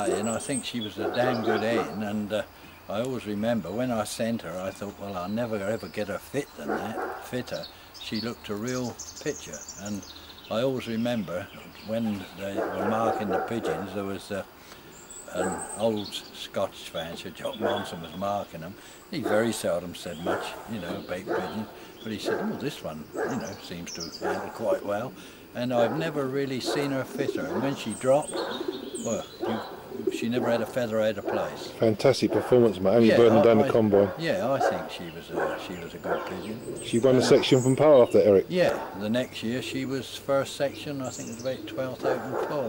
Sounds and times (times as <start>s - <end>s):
Chirp, tweet: 0.0s - 42.6s.